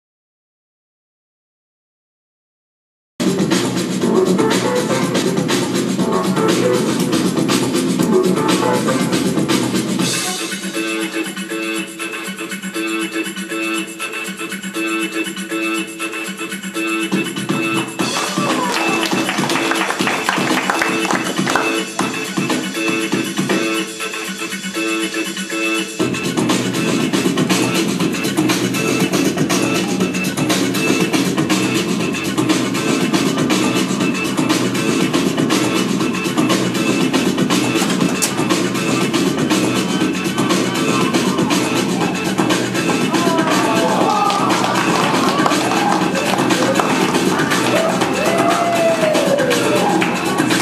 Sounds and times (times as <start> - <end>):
Music: 3.2 - 50.6.